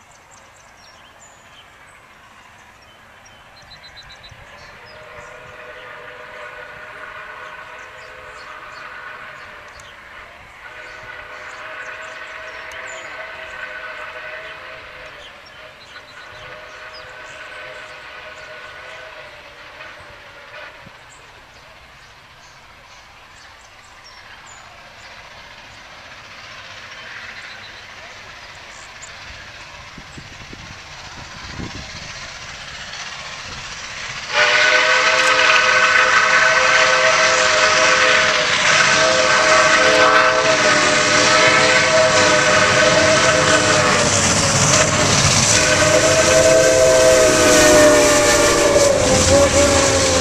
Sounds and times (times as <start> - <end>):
Hiss: 4.3 - 50.2
Steam whistle: 4.6 - 21.1, 34.2 - 50.2.